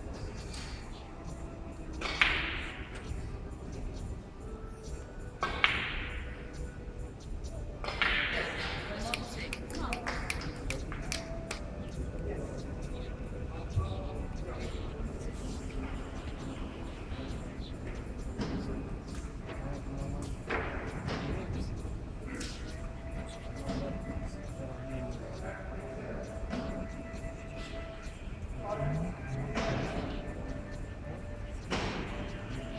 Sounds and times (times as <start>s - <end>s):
Music: 0.0s - 32.7s
Speech: 8.3s - 18.9s, 19.5s - 26.8s, 28.5s - 31.2s.